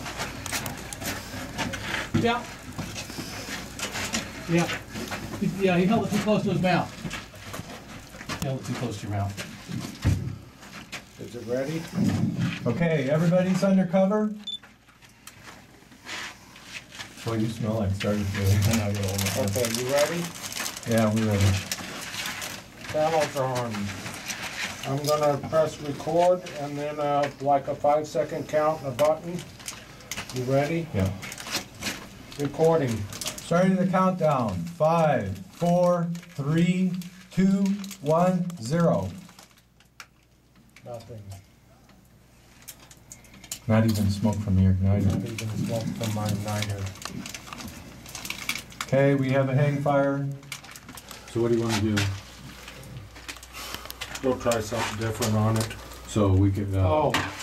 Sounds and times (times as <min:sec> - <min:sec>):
Speech: 0:05.4 - 0:07.0, 0:08.4 - 0:09.4, 0:11.2 - 0:14.4, 0:17.2 - 0:21.6, 0:22.9 - 0:24.0, 0:24.8 - 0:29.5, 0:30.3 - 0:31.2, 0:32.4 - 0:39.2, 0:43.7 - 0:47.0, 0:48.9 - 0:50.4, 0:51.3 - 0:52.2, 0:54.2 - 0:57.4
Crackle: 0:14.4 - 0:28.3, 0:28.9 - 0:57.4.